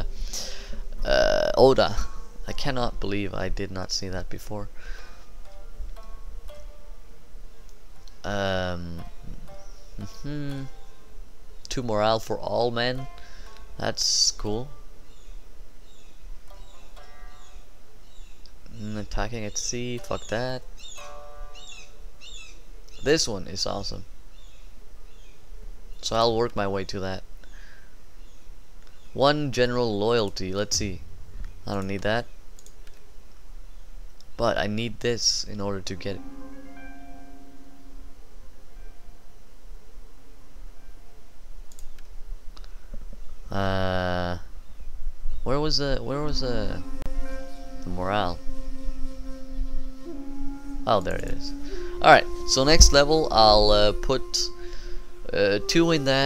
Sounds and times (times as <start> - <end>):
Music: 0.0 - 23.1, 35.4 - 43.8, 45.3 - 56.2
Speech: 1.0 - 4.7, 8.3 - 9.0, 10.0 - 10.8, 11.7 - 13.0, 13.8 - 14.7, 18.8 - 20.6, 23.0 - 24.1, 26.0 - 27.2, 29.2 - 31.0, 31.7 - 32.3, 34.4 - 36.2, 43.5 - 44.4, 45.5 - 46.8, 47.9 - 48.4, 50.9 - 54.5, 55.3 - 56.2
Chirp, tweet: 15.1 - 18.8, 19.5 - 23.1, 24.3 - 26.1.